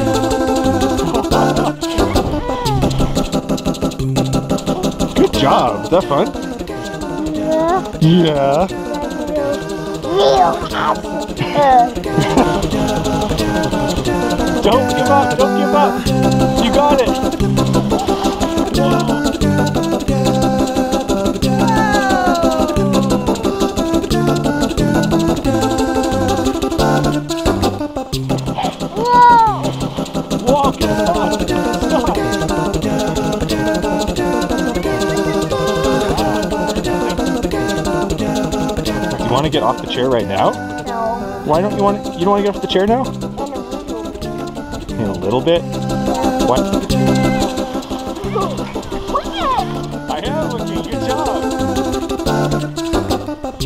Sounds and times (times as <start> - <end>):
Music: 0.0 - 53.6
Speech: 49.4 - 51.5.